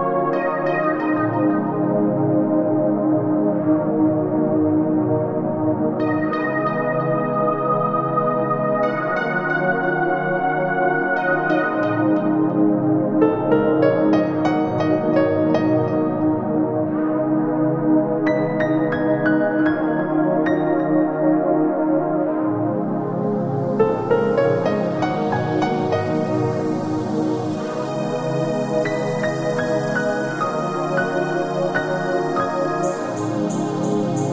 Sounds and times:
Ambient music: 0.0s - 34.3s.

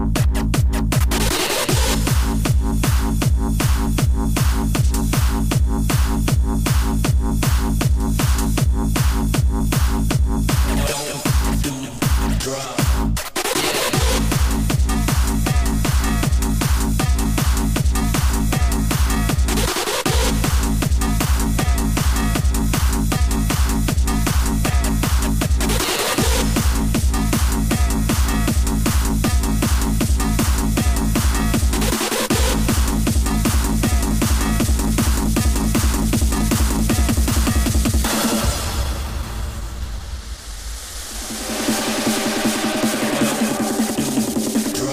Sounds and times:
Techno: 0.0s - 44.9s.

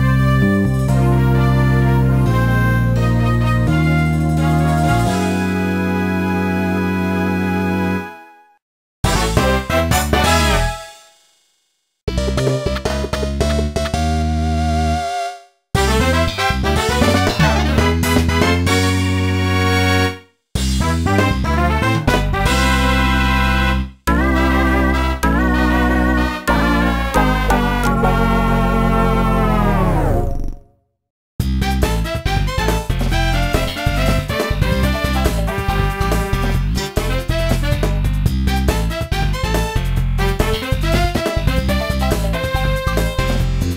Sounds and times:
Background music: 0.0s - 11.2s, 12.1s - 30.4s, 31.5s - 43.7s.

